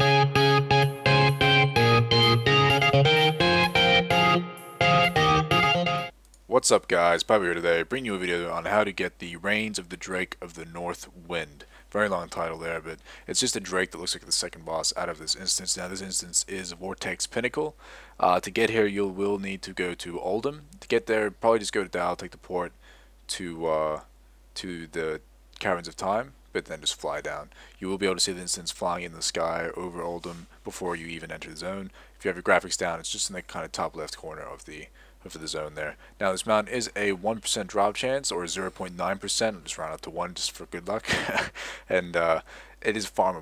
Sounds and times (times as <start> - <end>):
Speech: 6.5 - 43.4.